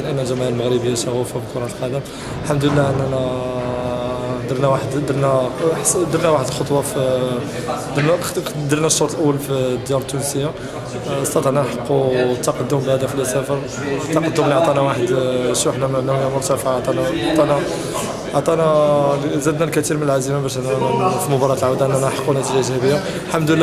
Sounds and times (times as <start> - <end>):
Speech: 0.0 - 23.6.